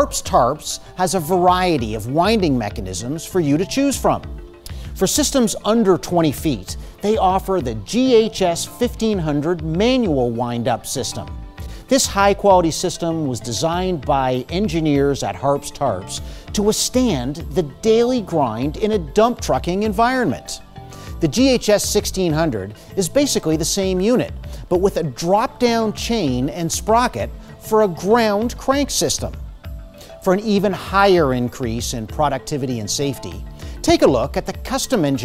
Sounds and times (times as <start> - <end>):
Speech: 0.0 - 4.3, 5.0 - 11.3, 11.9 - 20.6, 21.2 - 29.4, 30.2 - 35.2
Music: 0.0 - 35.2.